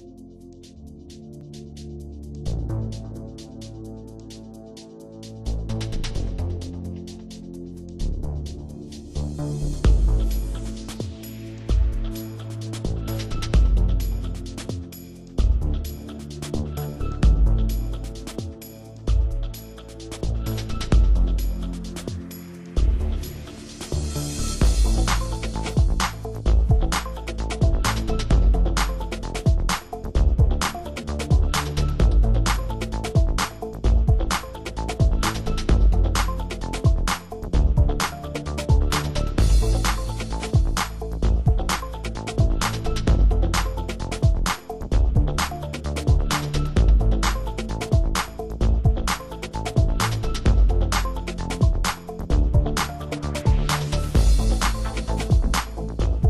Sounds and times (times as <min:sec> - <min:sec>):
Music: 0:00.0 - 0:56.2.